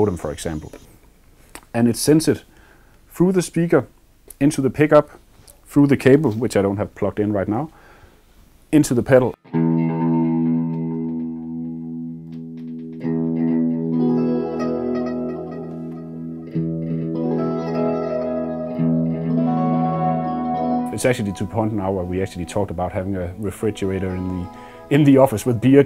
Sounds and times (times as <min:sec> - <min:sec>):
Speech: 0:00.0 - 0:00.8, 0:01.7 - 0:02.5, 0:03.1 - 0:07.8, 0:08.7 - 0:09.4, 0:20.9 - 0:25.8
Effects unit: 0:09.4 - 0:25.8
Guitar: 0:09.4 - 0:25.8.